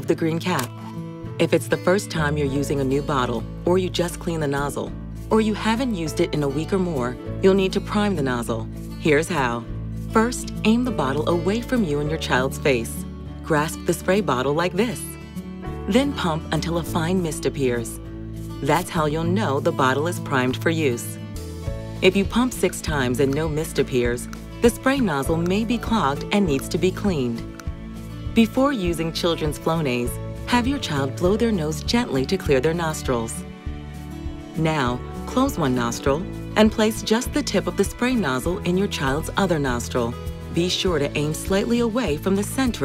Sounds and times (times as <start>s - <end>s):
Speech: 0.0s - 0.7s, 1.4s - 15.2s, 15.9s - 18.0s, 18.6s - 21.2s, 22.0s - 27.5s, 28.4s - 33.4s, 34.6s - 42.8s
Music: 0.0s - 42.8s.